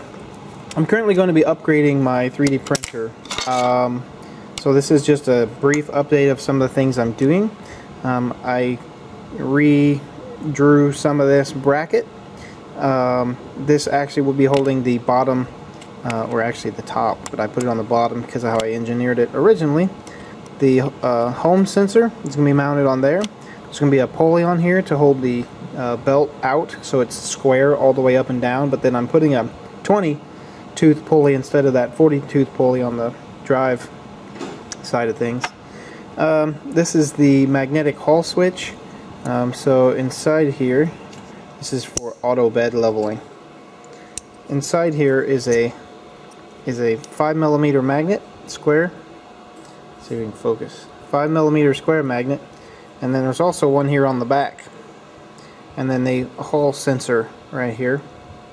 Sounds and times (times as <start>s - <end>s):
Speech: 0.8s - 12.1s, 12.8s - 20.0s, 20.6s - 30.2s, 30.8s - 33.9s, 34.8s - 35.5s, 36.2s - 41.0s, 41.6s - 43.3s, 44.5s - 45.8s, 46.6s - 49.0s, 50.0s - 54.7s, 55.8s - 58.1s.